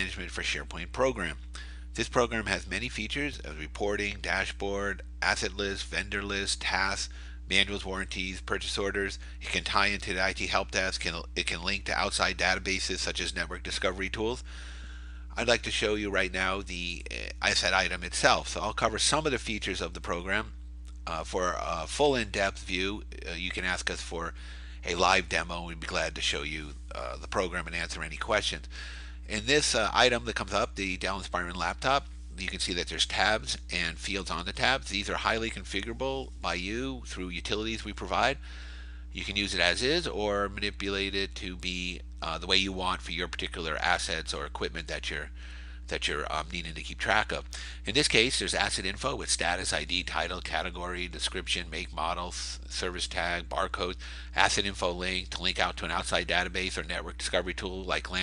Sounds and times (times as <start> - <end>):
Speech: 0.0 - 14.5, 15.3 - 38.4, 39.1 - 58.2.